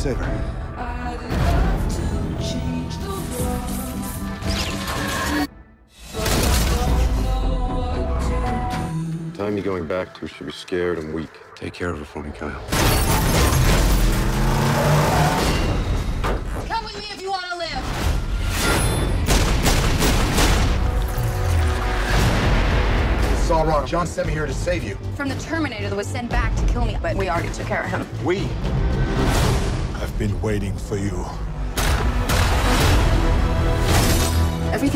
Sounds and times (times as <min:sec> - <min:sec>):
Music: 0:00.0 - 0:14.7, 0:15.3 - 0:34.9.